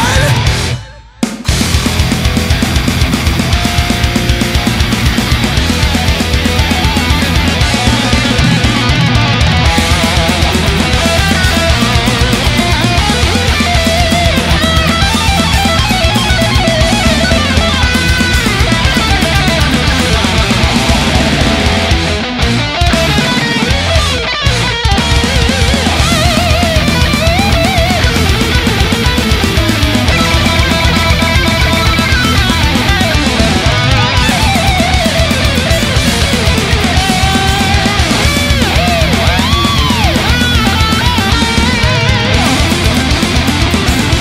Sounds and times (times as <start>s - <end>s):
Heavy metal: 0.0s - 44.2s.